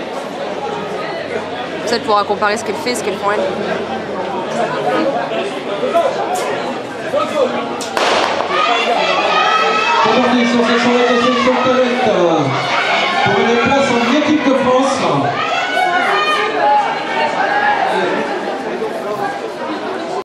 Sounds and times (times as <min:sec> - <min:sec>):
Outside, urban or manmade: 0:00.0 - 0:20.2.